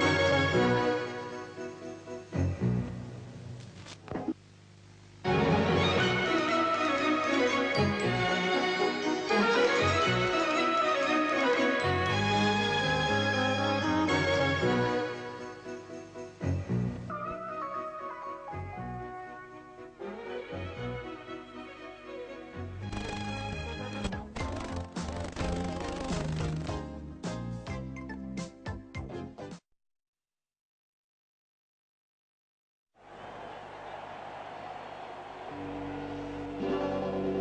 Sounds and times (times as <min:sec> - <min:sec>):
Jingle (music): 0:00.0 - 0:02.8, 0:05.3 - 0:24.1
Television: 0:00.0 - 0:18.6, 0:19.4 - 0:26.9, 0:33.0 - 0:37.4.